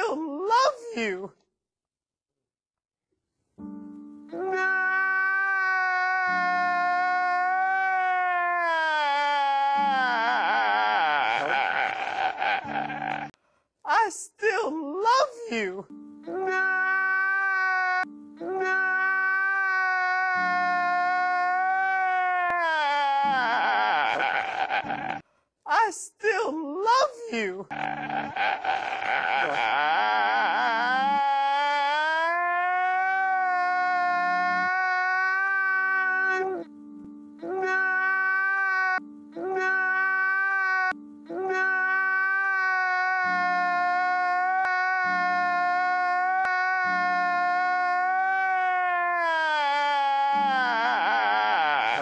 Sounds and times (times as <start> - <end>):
Music: 3.4 - 7.9, 12.3 - 13.6, 14.4 - 22.0, 32.3 - 52.0.